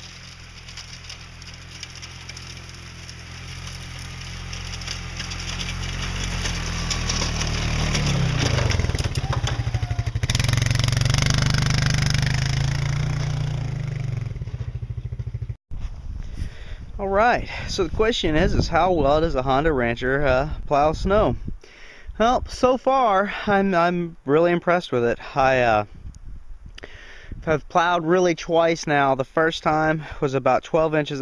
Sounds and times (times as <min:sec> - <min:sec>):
Idling: 0:00.0 - 0:13.2
Vehicle: 0:00.0 - 0:17.8.